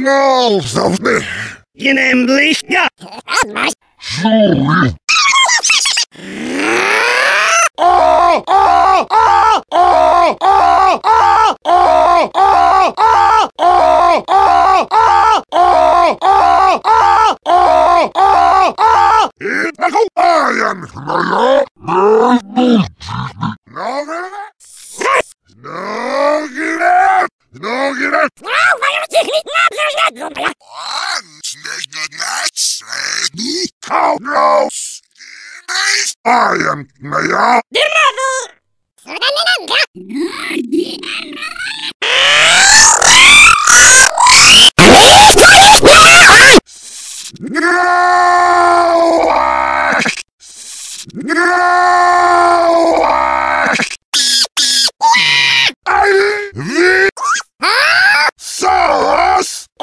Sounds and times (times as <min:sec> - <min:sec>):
Speech: 0:00.0 - 0:06.0, 0:19.4 - 0:22.9, 0:23.7 - 0:25.3, 0:27.6 - 0:35.0, 0:35.6 - 0:41.8.